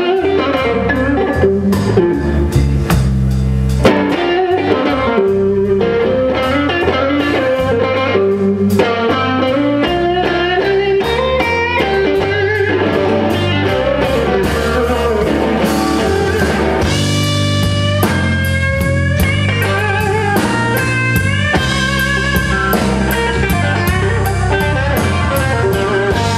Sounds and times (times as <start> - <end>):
Guitar: 0.0 - 26.3.